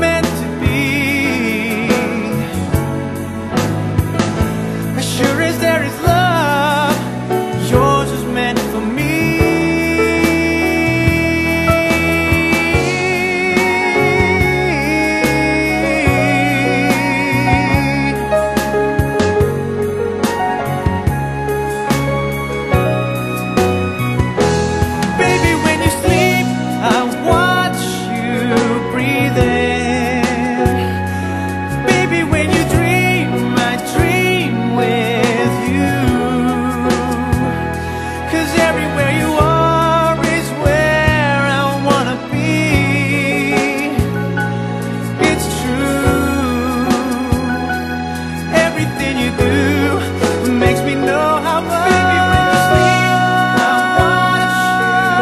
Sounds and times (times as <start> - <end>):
Music: 0.0 - 55.2.